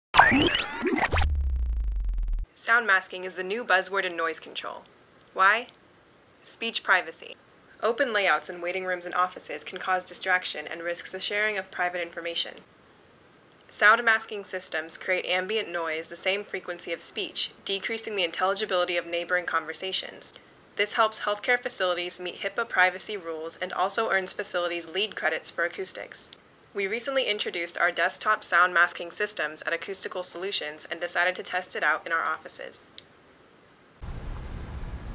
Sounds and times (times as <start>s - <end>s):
Speech: 2.5s - 5.8s, 6.4s - 12.7s, 13.7s - 33.0s.